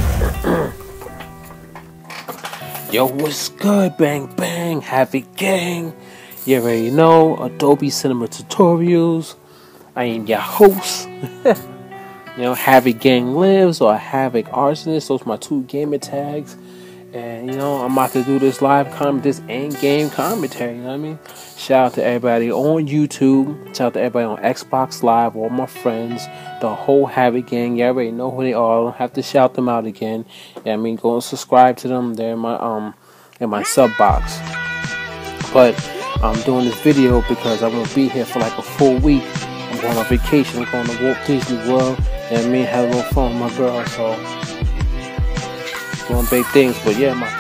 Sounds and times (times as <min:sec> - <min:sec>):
Music: 0:00.0 - 0:33.0, 0:33.6 - 0:47.4
Speech: 0:02.9 - 0:09.4, 0:10.0 - 0:11.6, 0:12.4 - 0:16.6, 0:17.2 - 0:34.4, 0:35.5 - 0:39.2, 0:39.8 - 0:44.2, 0:46.1 - 0:47.3.